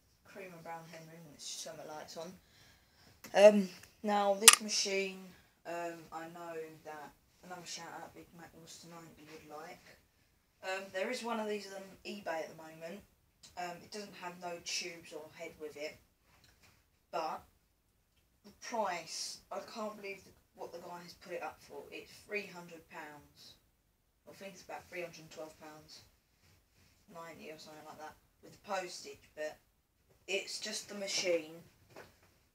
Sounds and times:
Speech: 0.3 - 2.4, 3.3 - 10.0, 10.6 - 16.0, 17.2 - 17.5, 18.5 - 23.6, 24.3 - 26.1, 27.1 - 29.6, 30.3 - 31.7.

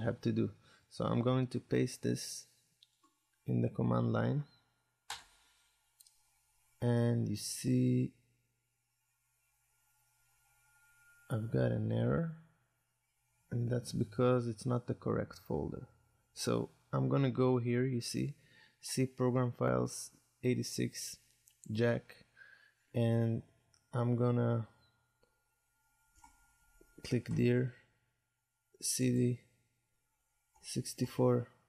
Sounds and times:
Speech: 0.0 - 2.5, 3.5 - 4.5, 6.8 - 8.1, 11.3 - 12.4, 13.5 - 22.2, 23.0 - 23.4, 24.0 - 24.7, 27.0 - 27.8, 28.8 - 29.5, 30.6 - 31.5
Inside, small room: 0.0 - 31.6.

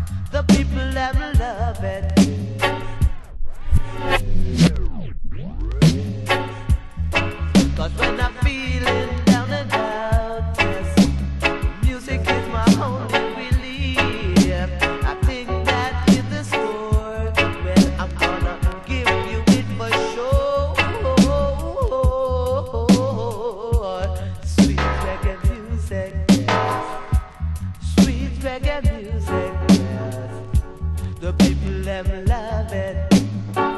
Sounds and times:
Music: 0.0 - 33.7.

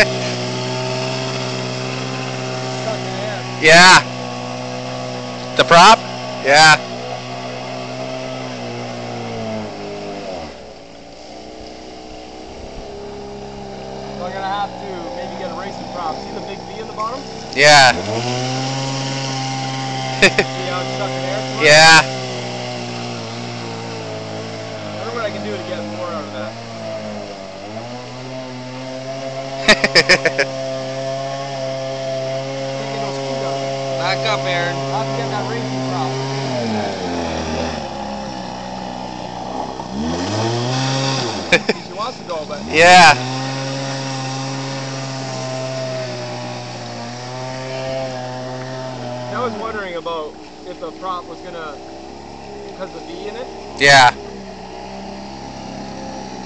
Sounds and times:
Motorboat, speedboat: 5.4 - 14.5, 22.8 - 42.7, 51.2 - 56.4.

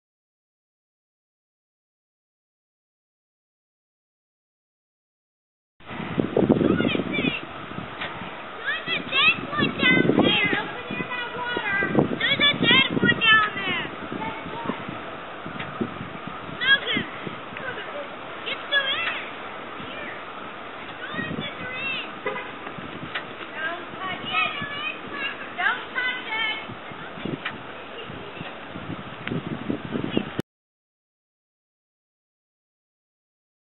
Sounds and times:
Speech: 8.6 - 14.8, 21.0 - 22.1, 23.5 - 28.5.

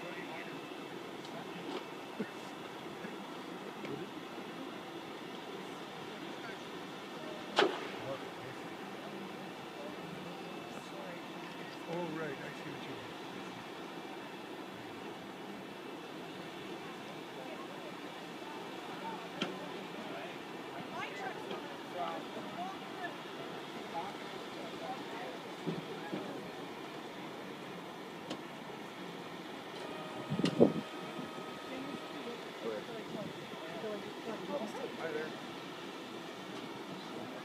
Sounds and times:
Vehicle: 0.0 - 37.4
Speech: 16.9 - 26.6, 31.6 - 35.4.

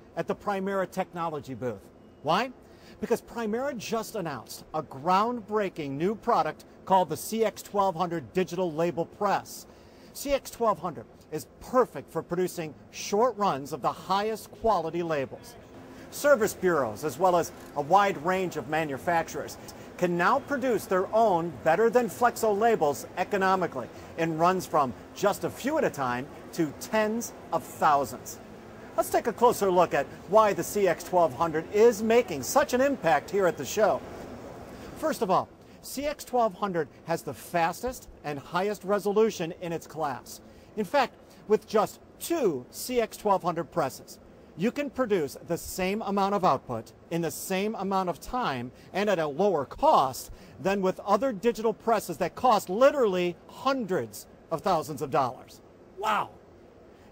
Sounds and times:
Speech: 0.2 - 28.4, 29.0 - 34.0, 35.0 - 56.4.

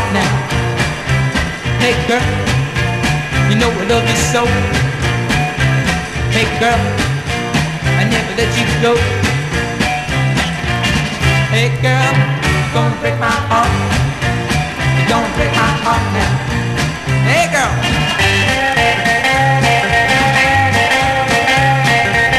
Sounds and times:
Music: 0.0 - 22.3.

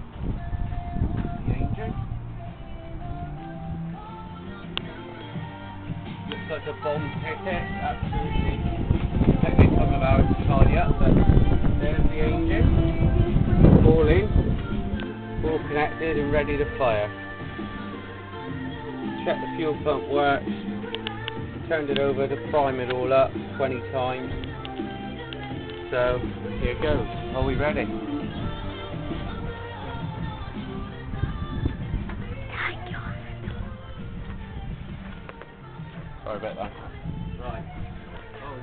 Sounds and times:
Music: 0.0 - 38.6.

